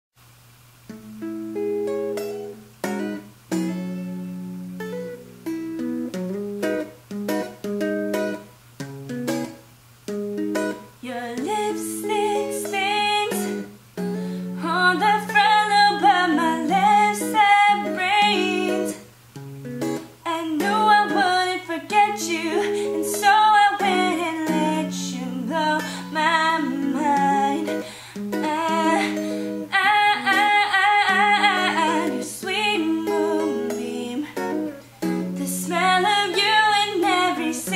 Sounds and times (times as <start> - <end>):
Guitar: 0.3 - 37.7.